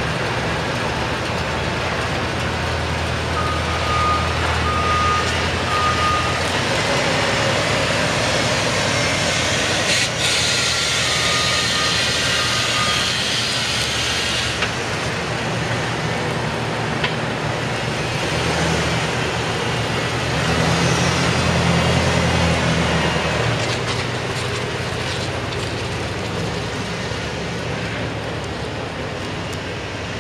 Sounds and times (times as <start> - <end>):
Reversing beeps: 3.4 - 6.5, 11.0 - 13.3.